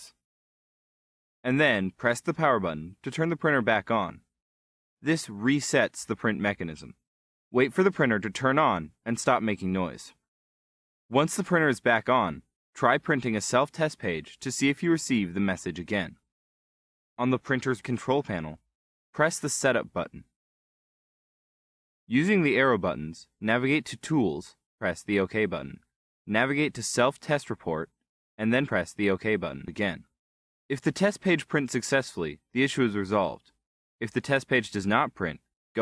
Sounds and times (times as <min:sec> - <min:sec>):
Speech: 0:00.0 - 0:00.2, 0:01.5 - 0:04.3, 0:05.0 - 0:07.0, 0:07.6 - 0:10.3, 0:11.1 - 0:16.3, 0:17.2 - 0:20.3, 0:22.1 - 0:35.8.